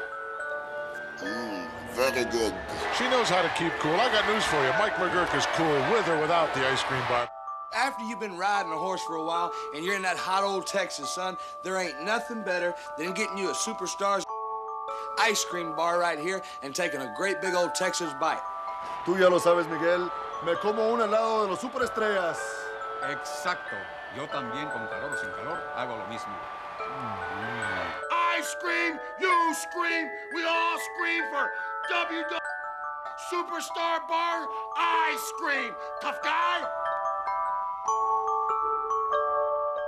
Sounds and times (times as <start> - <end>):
Marimba, xylophone: 0.0 - 3.0, 7.3 - 39.8
Glockenspiel: 0.0 - 39.8.